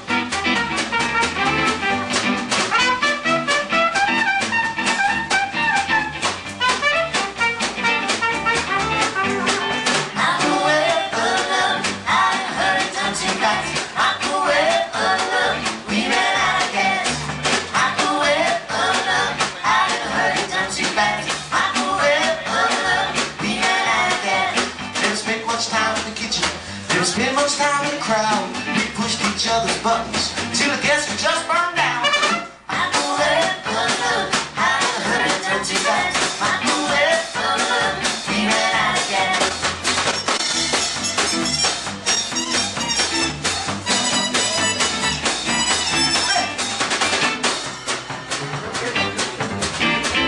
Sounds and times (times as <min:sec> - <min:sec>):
Music: 0:00.0 - 0:50.2.